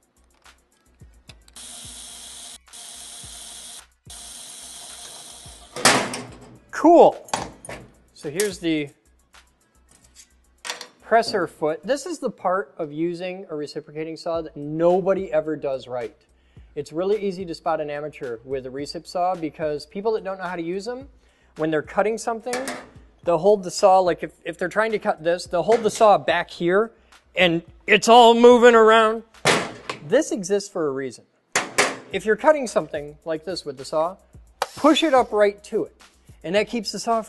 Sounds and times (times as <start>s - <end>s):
Speech: 6.8s - 7.2s, 8.2s - 8.9s, 11.1s - 16.2s, 16.8s - 29.2s, 30.1s - 31.2s, 32.2s - 34.2s, 34.8s - 37.2s
Tools: 9.9s - 11.0s, 22.5s - 22.9s.